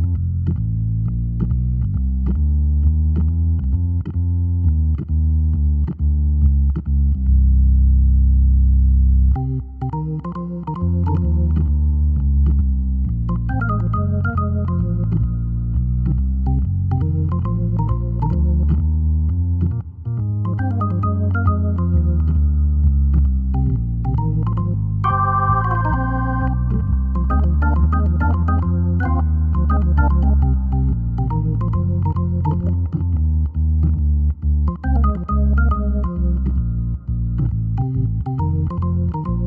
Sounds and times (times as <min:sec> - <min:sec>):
Electronic organ: 0:00.0 - 0:39.4.